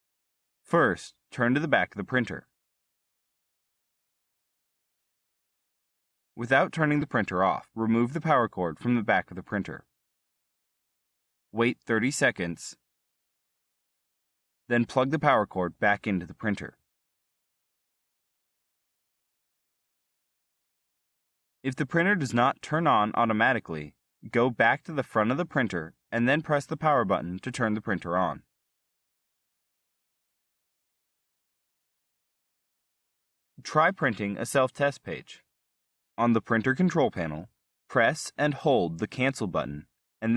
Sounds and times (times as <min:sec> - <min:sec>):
Speech: 0:00.7 - 0:02.6, 0:06.4 - 0:09.9, 0:11.6 - 0:12.8, 0:14.7 - 0:16.8, 0:21.7 - 0:28.5, 0:33.6 - 0:35.5, 0:36.2 - 0:40.3.